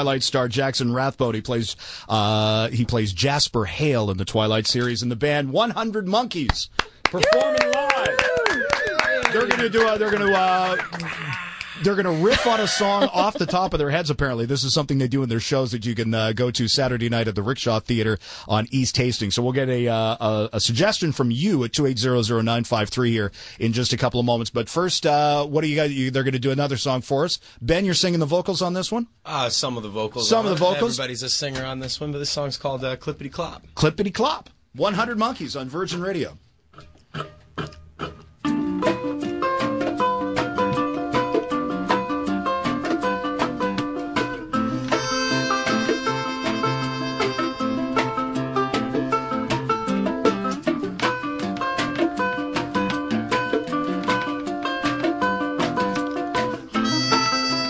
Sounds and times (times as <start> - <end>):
Speech: 0.0 - 8.2, 9.0 - 10.9, 11.8 - 36.4.